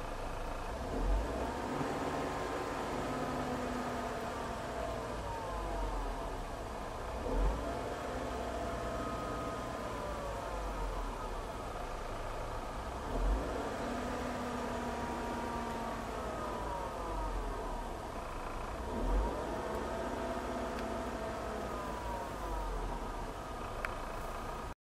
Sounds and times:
Car: 0.0 - 24.8
Accelerating, revving, vroom: 0.8 - 5.2, 7.1 - 10.4, 13.0 - 17.4, 18.8 - 22.9.

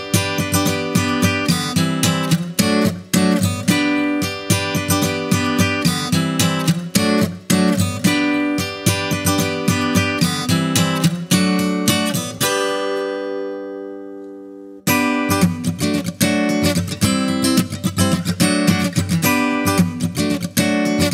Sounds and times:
Music: 0.0 - 21.1.

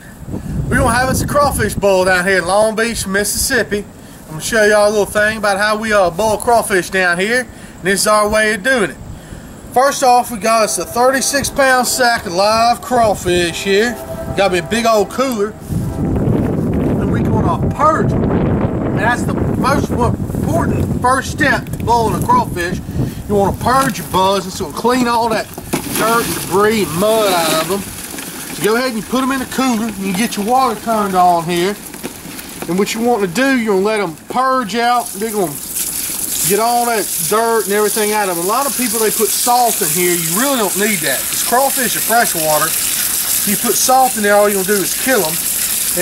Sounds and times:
Frying (food): 25.8 - 33.0, 34.9 - 46.0.

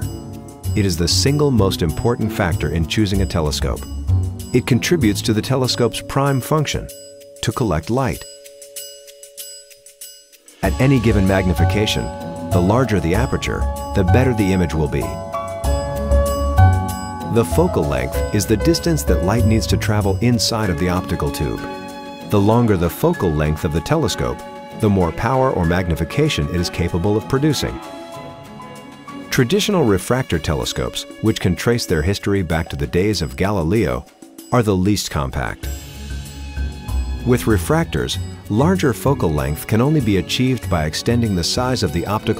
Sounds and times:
Glockenspiel: 0.0 - 42.3
Speech: 0.8 - 3.8, 4.6 - 8.3, 10.6 - 15.2, 17.2 - 21.7, 22.3 - 27.8, 29.3 - 35.7, 37.2 - 42.3.

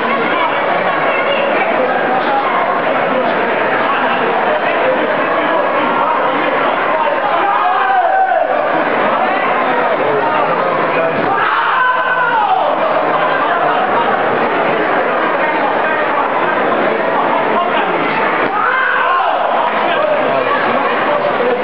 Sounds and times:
Inside, public space: 0.0 - 21.6
Speech: 0.0 - 21.6.

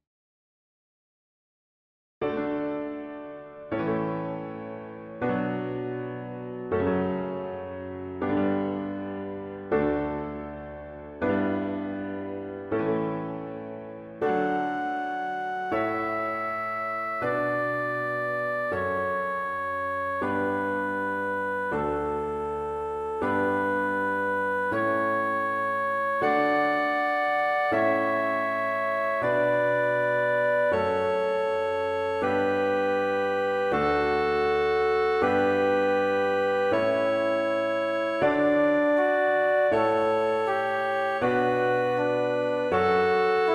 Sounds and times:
Music: 2.2 - 43.5.

